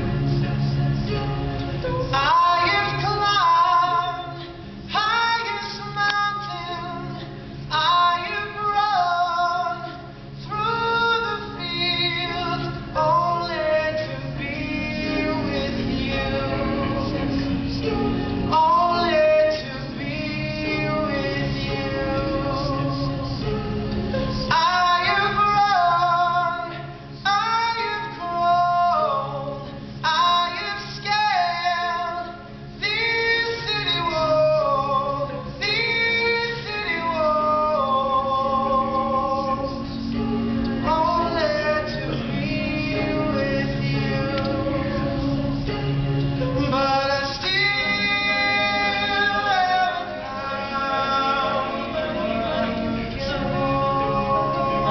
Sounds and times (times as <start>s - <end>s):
Music: 0.0s - 54.9s.